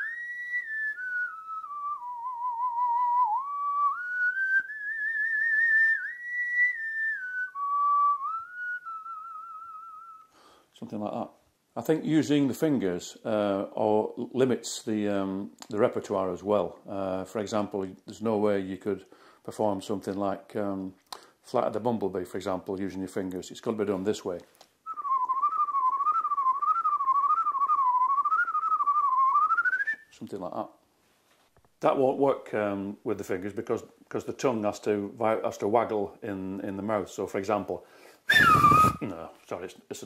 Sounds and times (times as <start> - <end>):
Whistling: 0.0 - 10.4, 24.8 - 30.2, 38.2 - 39.1
Inside, small room: 0.0 - 40.0
Speech: 10.7 - 24.5, 30.1 - 30.8, 31.8 - 37.8, 38.9 - 40.0.